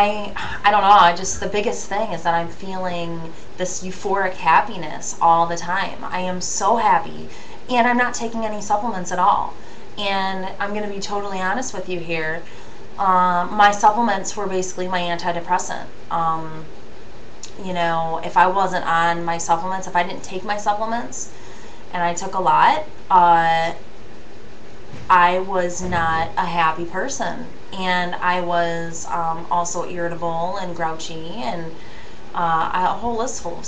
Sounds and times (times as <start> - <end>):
Speech: 0.0 - 16.7, 17.4 - 21.3, 21.9 - 23.8, 25.1 - 31.8, 32.4 - 33.6.